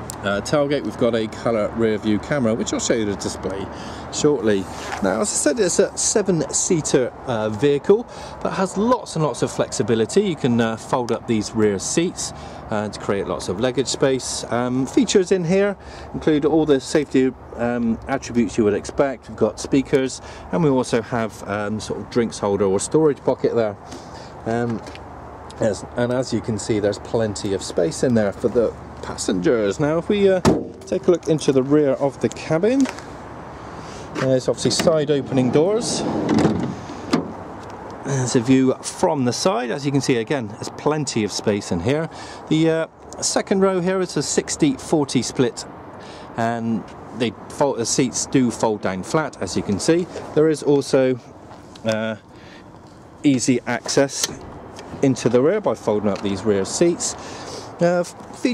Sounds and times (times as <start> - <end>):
Vehicle: 0.0 - 58.5.